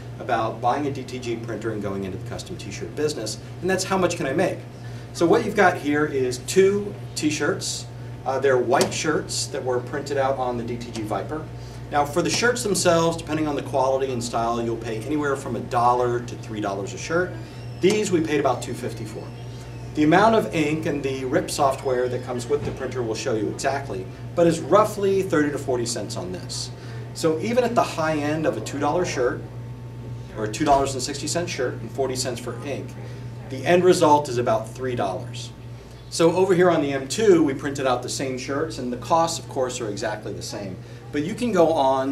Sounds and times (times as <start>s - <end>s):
Speech: 0.2s - 19.4s, 20.0s - 29.5s, 30.3s - 42.1s.